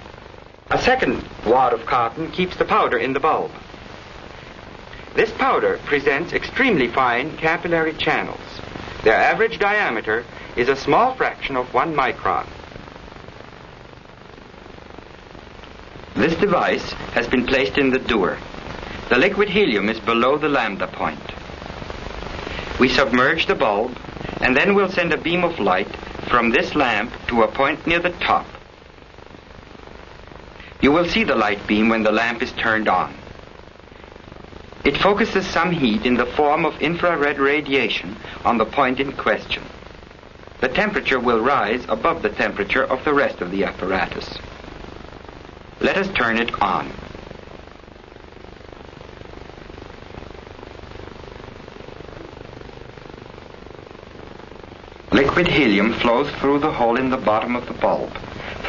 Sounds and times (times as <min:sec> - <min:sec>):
Speech: 0:00.7 - 0:03.6, 0:05.1 - 0:12.5, 0:16.2 - 0:18.4, 0:19.0 - 0:21.4, 0:22.8 - 0:28.6, 0:30.8 - 0:33.2, 0:34.8 - 0:39.7, 0:40.6 - 0:44.4, 0:45.8 - 0:47.0, 0:55.1 - 0:58.6.